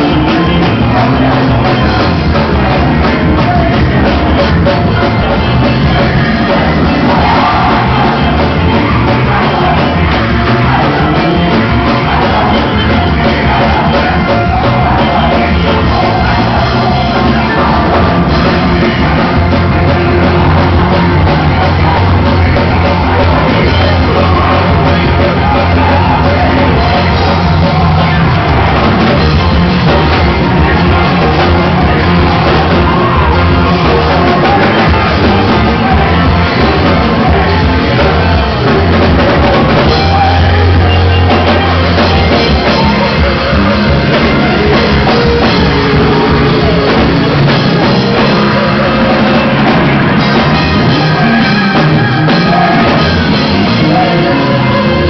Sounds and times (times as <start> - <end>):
Music: 0.0 - 55.1.